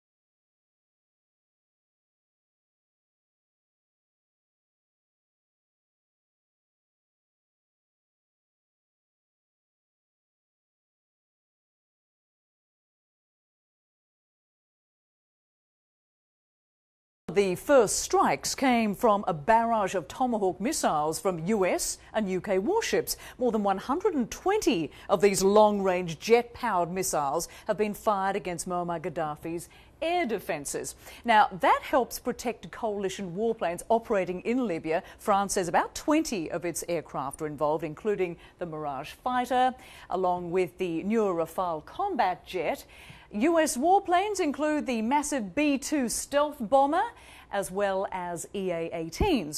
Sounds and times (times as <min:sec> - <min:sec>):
Speech: 0:17.3 - 0:49.5.